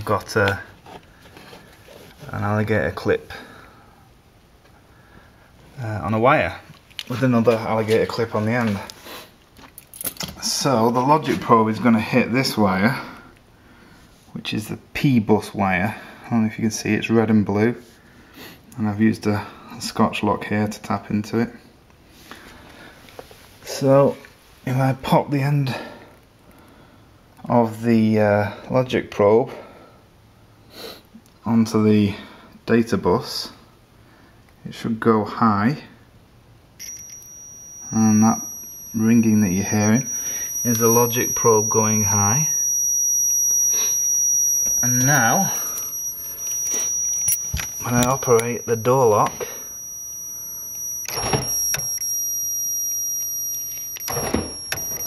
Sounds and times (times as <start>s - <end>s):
Speech: 0.0s - 0.8s, 2.2s - 3.5s, 5.8s - 8.9s, 10.4s - 13.1s, 14.4s - 17.8s, 18.8s - 21.6s, 23.7s - 25.9s, 27.4s - 29.6s, 31.4s - 33.6s, 34.6s - 36.0s, 39.0s - 40.1s.